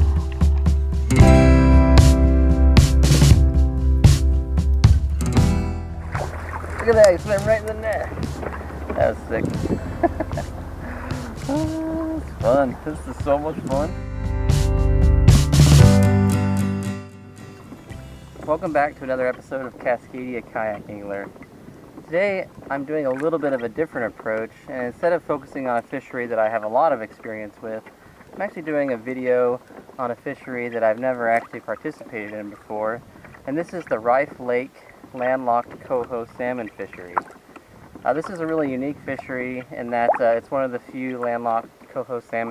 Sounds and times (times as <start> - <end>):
Music: 0.0 - 8.6, 9.3 - 19.1
Rowboat, canoe, kayak: 0.0 - 16.0, 17.3 - 42.5
Speech: 6.8 - 8.1, 8.9 - 9.6, 11.4 - 14.0, 18.4 - 21.3, 22.1 - 37.2, 38.0 - 42.5.